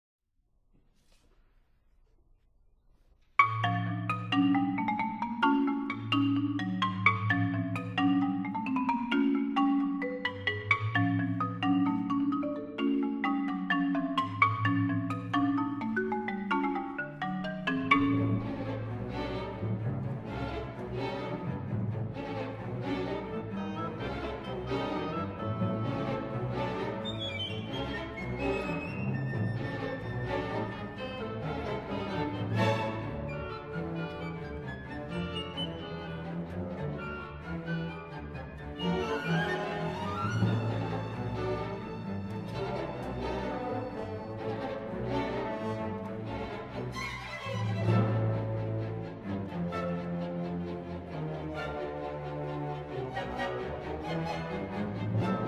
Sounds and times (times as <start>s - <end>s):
Marimba, xylophone: 3.4s - 55.4s.